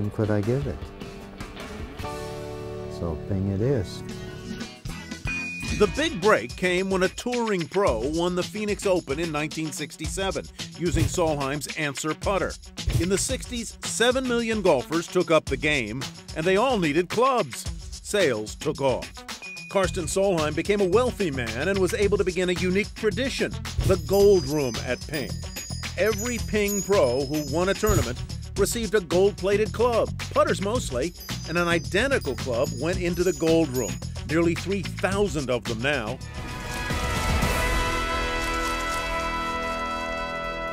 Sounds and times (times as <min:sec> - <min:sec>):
Speech: 0:00.0 - 0:00.8, 0:02.9 - 0:04.0, 0:05.8 - 0:19.1, 0:19.7 - 0:25.3, 0:26.0 - 0:36.2
Music: 0:00.0 - 0:40.7.